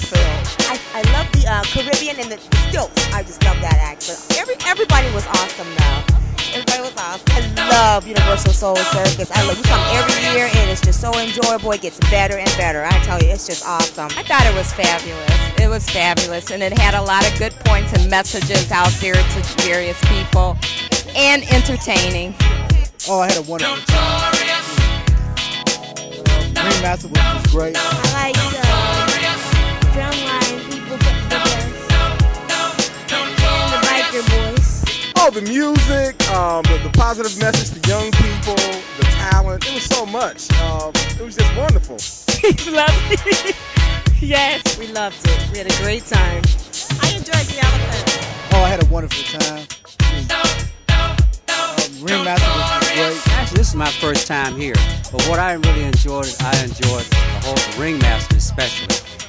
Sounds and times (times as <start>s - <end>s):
Reggae: 0.0s - 59.2s.